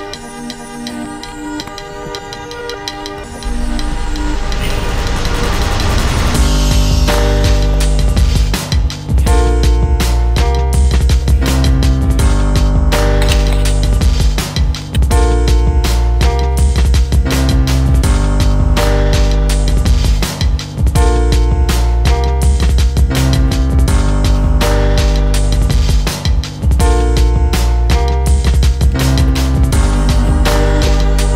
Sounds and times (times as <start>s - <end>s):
Music: 0.0s - 31.3s.